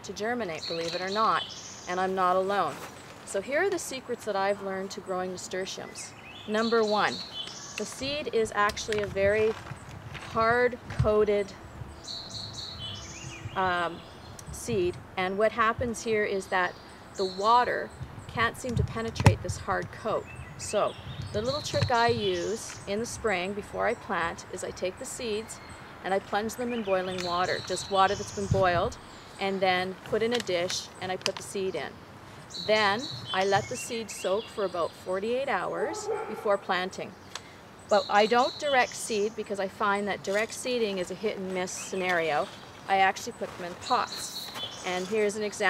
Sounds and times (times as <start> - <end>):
Speech: 0.0 - 7.2, 7.8 - 9.6, 10.3 - 11.6, 13.6 - 31.9, 32.6 - 37.1, 37.9 - 45.6
Outside, urban or manmade: 0.0 - 45.6.